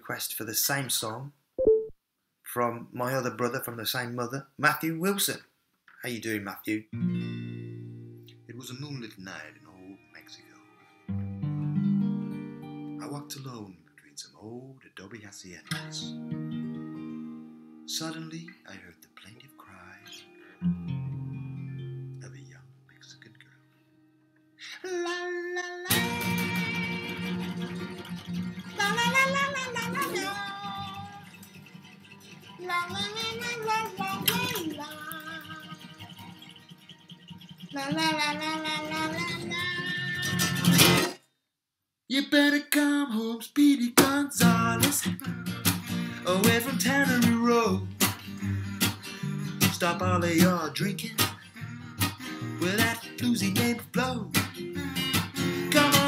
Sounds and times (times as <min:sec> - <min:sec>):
Speech: 0:00.0 - 0:01.4, 0:02.4 - 0:06.9, 0:08.5 - 0:10.6, 0:13.0 - 0:16.2, 0:17.9 - 0:20.2, 0:22.2 - 0:23.6
Acoustic guitar: 0:06.8 - 0:14.1, 0:15.6 - 0:41.2, 0:42.2 - 0:56.0.